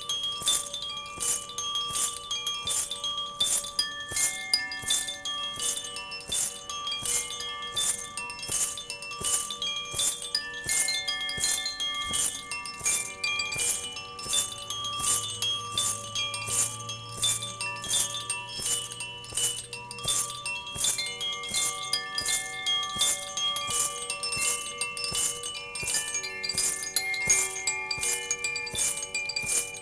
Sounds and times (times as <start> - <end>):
Wind chime: 0.0 - 29.8.